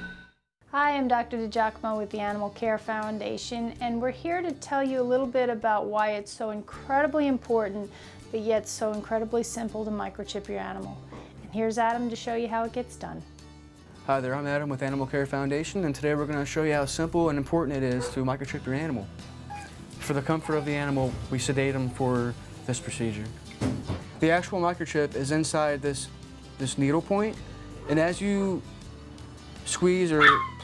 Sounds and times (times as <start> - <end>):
Music: 0.0 - 30.6
Speech: 14.1 - 19.1, 20.0 - 23.3, 24.2 - 28.6, 29.7 - 30.4.